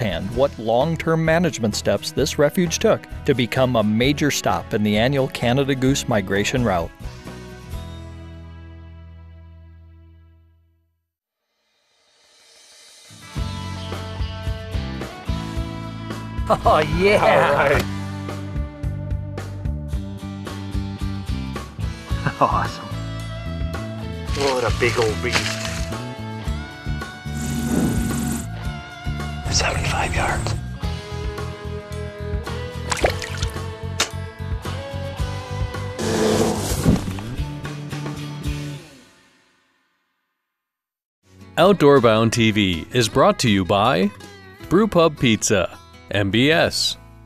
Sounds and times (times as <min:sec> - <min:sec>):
Speech: 0:00.0 - 0:06.9, 0:16.5 - 0:17.9, 0:22.3 - 0:22.9, 0:24.3 - 0:25.6, 0:29.5 - 0:30.6, 0:41.6 - 0:47.0
Music: 0:00.0 - 0:40.5, 0:41.2 - 0:47.2.